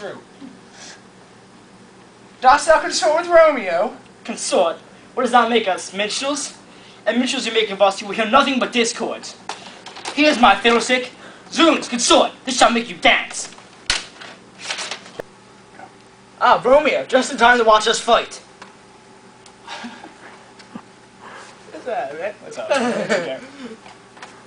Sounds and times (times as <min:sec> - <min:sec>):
Speech: 0:02.4 - 0:09.4, 0:10.1 - 0:13.6, 0:16.4 - 0:18.5, 0:21.7 - 0:23.5.